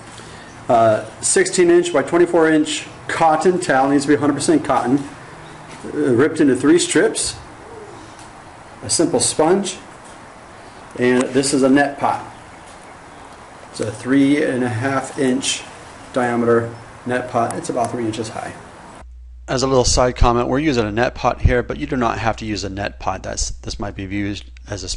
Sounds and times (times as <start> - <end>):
Speech: 0.7 - 5.1, 5.8 - 7.4, 8.8 - 9.9, 11.0 - 12.3, 13.7 - 18.6, 19.5 - 24.9.